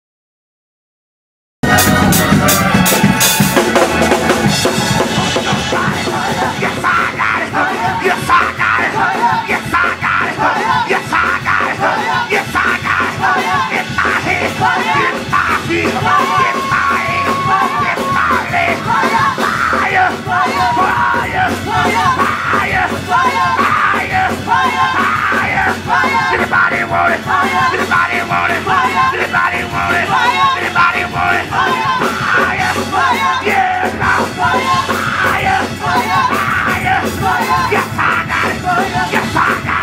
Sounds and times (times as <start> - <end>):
Music: 1.6 - 39.8.